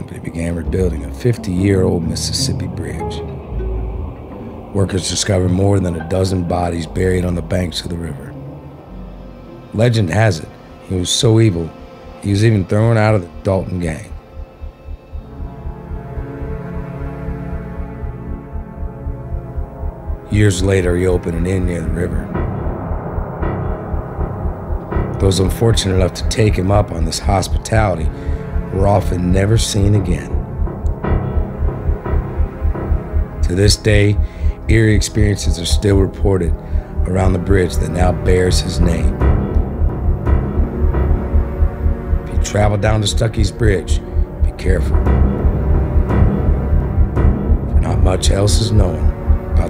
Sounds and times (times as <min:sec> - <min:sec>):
Speech: 0:00.0 - 0:03.3, 0:04.7 - 0:08.4, 0:09.7 - 0:14.2, 0:20.2 - 0:22.4, 0:25.2 - 0:30.4, 0:33.4 - 0:39.2, 0:42.3 - 0:45.1, 0:47.8 - 0:49.6
Music: 0:00.0 - 0:49.6.